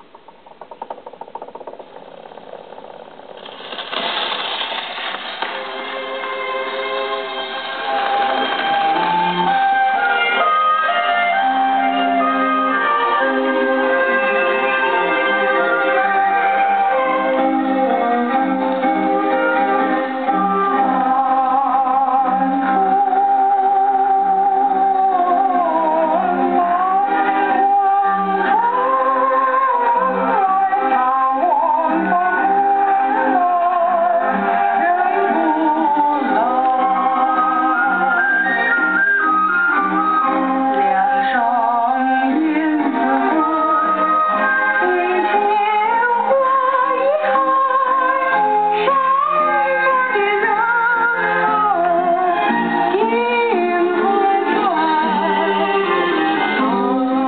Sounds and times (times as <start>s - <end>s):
Music: 0.0s - 57.2s
Synthetic singing: 20.3s - 38.8s, 39.9s - 57.2s.